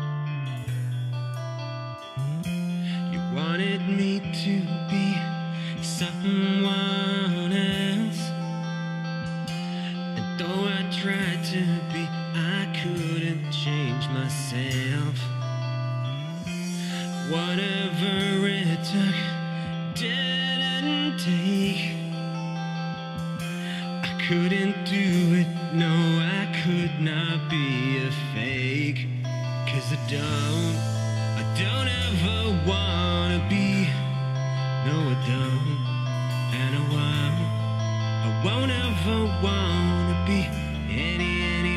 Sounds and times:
Music: 0.0s - 41.7s.

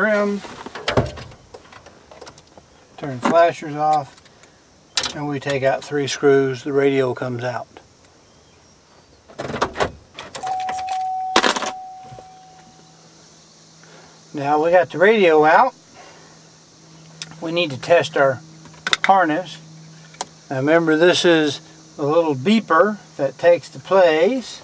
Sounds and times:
Speech: 0.0s - 0.5s, 3.0s - 4.2s, 5.1s - 7.8s, 14.3s - 15.8s, 17.3s - 18.4s, 19.0s - 19.6s, 20.5s - 24.6s.

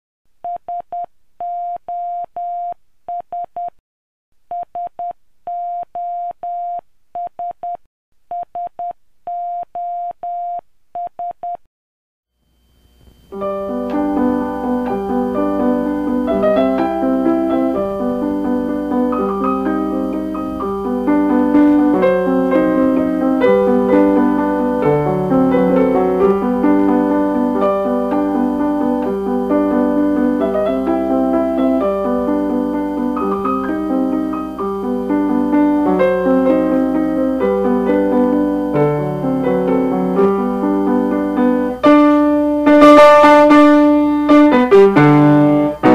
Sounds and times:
Music: 13.3s - 45.9s.

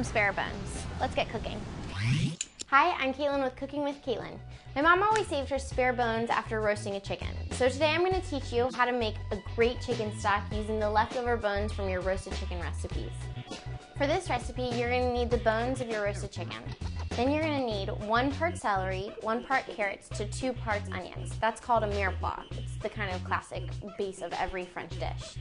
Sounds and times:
Speech: 0.0s - 1.6s, 2.7s - 13.1s, 14.0s - 25.4s
Music: 0.0s - 25.4s.

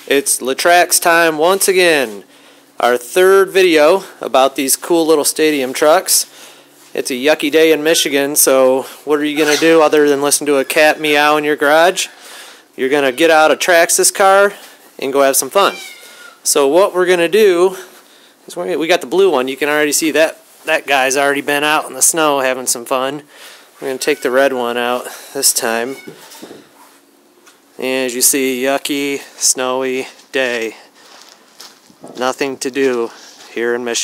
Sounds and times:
Speech: 0.0s - 2.2s, 2.8s - 6.3s, 6.9s - 12.2s, 12.8s - 15.8s, 16.4s - 17.9s, 18.5s - 26.1s, 27.8s - 30.9s, 32.2s - 34.0s.

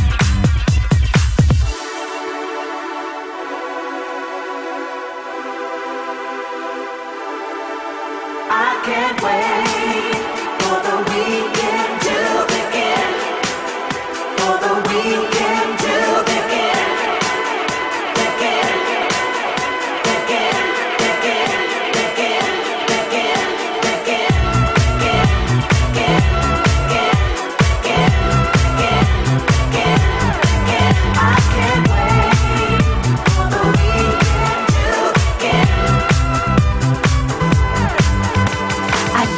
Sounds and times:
Pop music: 0.0s - 39.3s.

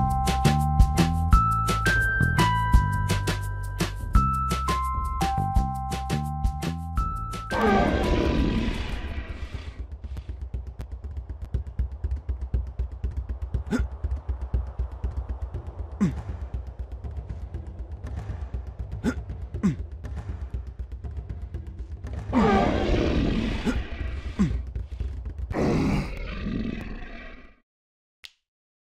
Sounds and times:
Music: 0.0s - 25.6s.

